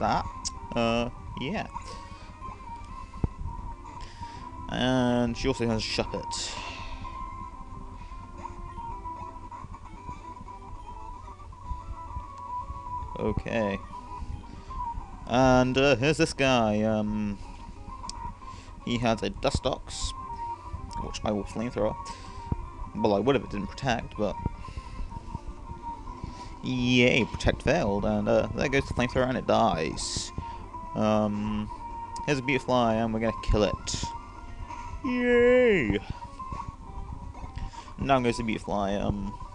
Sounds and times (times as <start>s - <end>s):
Speech: 0.0s - 1.7s, 4.7s - 6.5s, 13.2s - 13.8s, 15.3s - 17.4s, 18.9s - 20.1s, 21.0s - 22.0s, 23.0s - 24.4s, 26.6s - 30.3s, 31.0s - 34.1s, 35.1s - 36.0s, 38.0s - 39.4s.